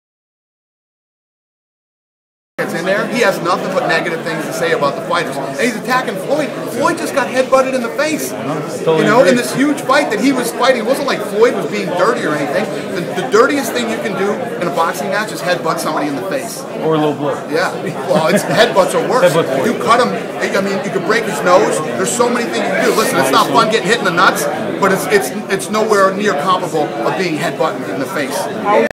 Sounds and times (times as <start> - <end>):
Speech: 2.6 - 28.9.